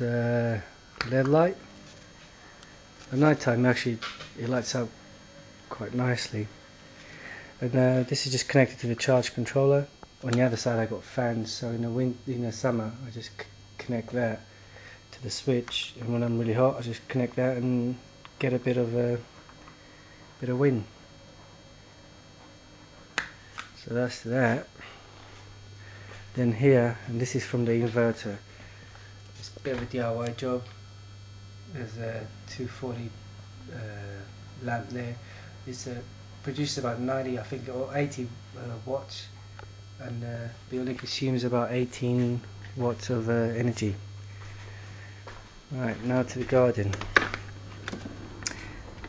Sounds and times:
Speech: 0.0 - 1.7, 3.1 - 5.0, 5.7 - 6.6, 7.6 - 14.5, 15.1 - 19.3, 20.4 - 20.9, 23.8 - 24.8, 26.3 - 28.4, 29.4 - 30.7, 31.7 - 39.4, 40.0 - 44.0, 45.7 - 47.1.

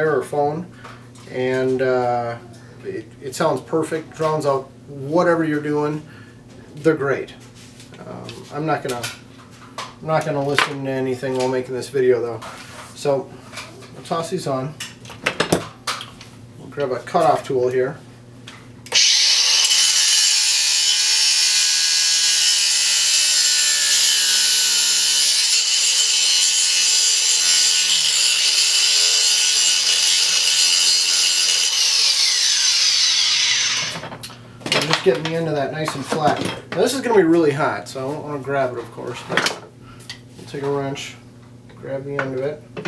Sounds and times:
Speech: 0.0 - 0.7, 1.3 - 6.1, 6.8 - 7.4, 8.0 - 9.2, 10.0 - 13.3, 14.0 - 14.8, 16.6 - 18.0, 34.8 - 39.4, 40.4 - 41.2, 41.8 - 42.6.

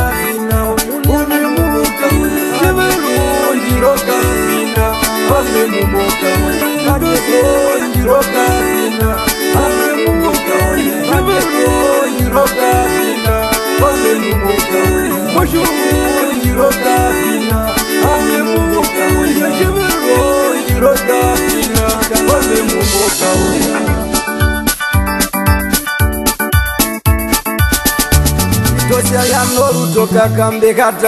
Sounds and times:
Music: 0.0 - 31.0.

